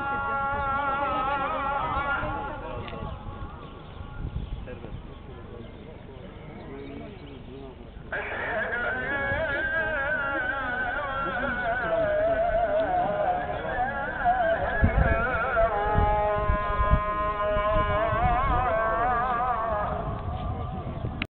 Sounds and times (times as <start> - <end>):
Speech: 0.0 - 3.6, 4.6 - 14.4.